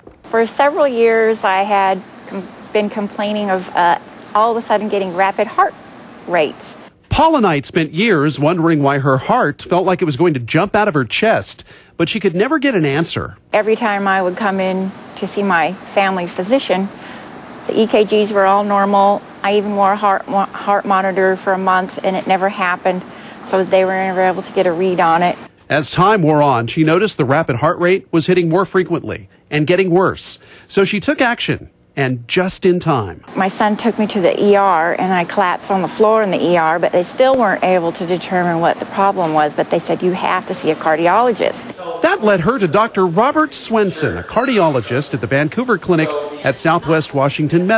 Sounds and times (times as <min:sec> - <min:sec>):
Speech: 0:17.7 - 0:47.7.